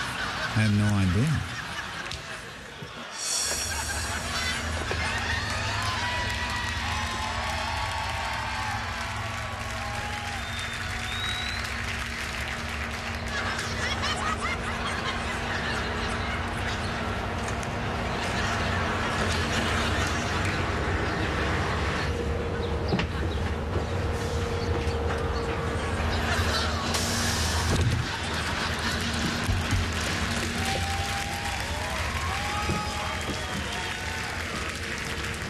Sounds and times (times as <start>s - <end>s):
Bus: 0.0s - 35.5s.